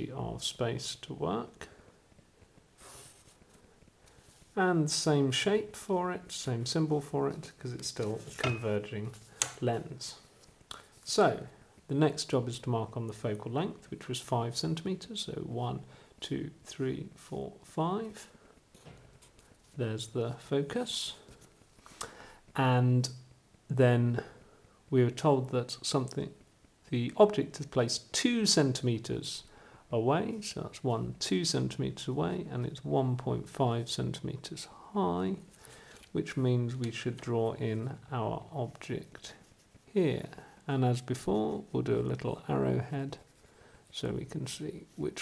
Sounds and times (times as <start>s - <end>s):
Speech: 0.0s - 1.8s, 4.6s - 10.3s, 11.0s - 18.3s, 19.8s - 21.3s, 22.6s - 35.5s, 36.1s - 43.3s, 43.9s - 45.2s.